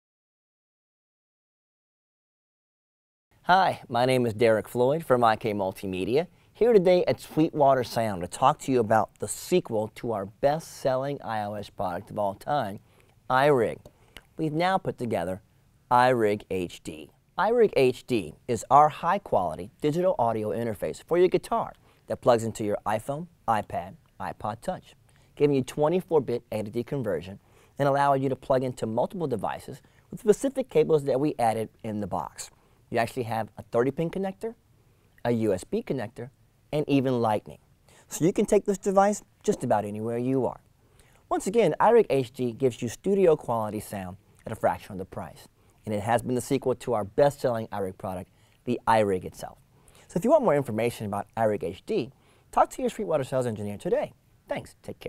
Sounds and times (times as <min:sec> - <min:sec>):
Speech: 0:03.4 - 0:34.6, 0:35.2 - 0:40.7, 0:41.3 - 0:55.0.